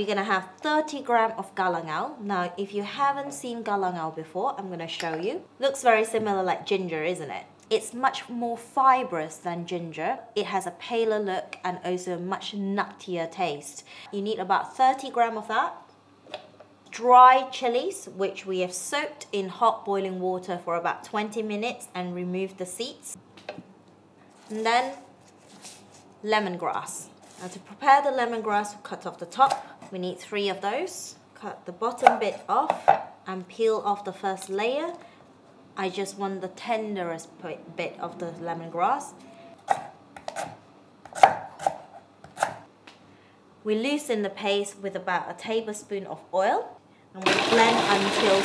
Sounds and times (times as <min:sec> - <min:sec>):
Speech: 0:00.0 - 0:15.8, 0:16.9 - 0:23.2, 0:24.5 - 0:25.0, 0:26.2 - 0:35.0, 0:35.8 - 0:39.2, 0:43.6 - 0:48.4.